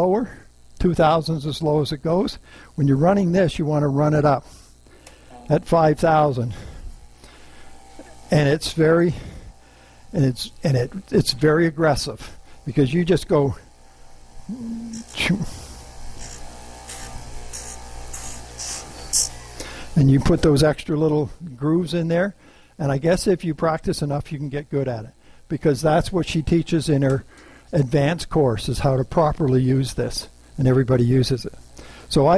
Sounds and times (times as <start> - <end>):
Speech: 0.0 - 4.4, 5.4 - 6.6, 8.3 - 9.2, 10.2 - 13.6, 14.5 - 15.6, 20.0 - 32.3.